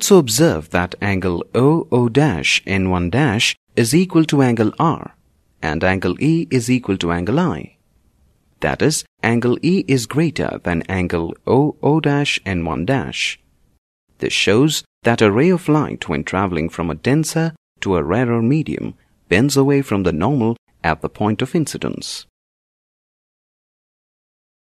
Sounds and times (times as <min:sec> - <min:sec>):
Speech: 0:00.0 - 0:07.8, 0:08.6 - 0:13.4, 0:14.2 - 0:22.3.